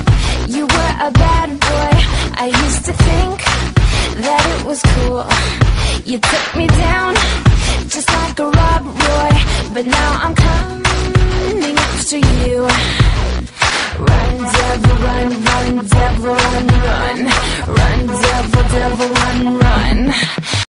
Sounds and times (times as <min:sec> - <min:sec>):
Music: 0:00.0 - 0:20.6.